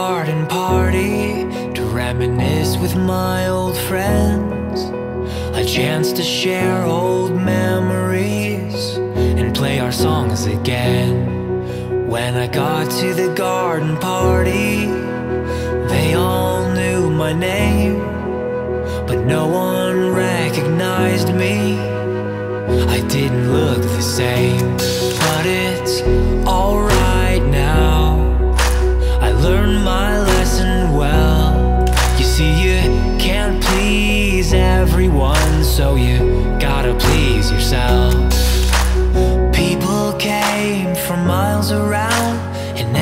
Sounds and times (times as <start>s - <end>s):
Music: 0.0s - 43.0s.